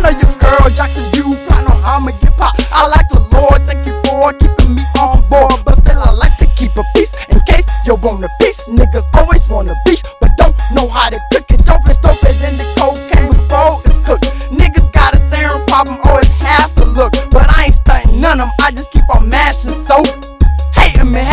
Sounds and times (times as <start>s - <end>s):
Hip hop music: 0.0s - 21.3s.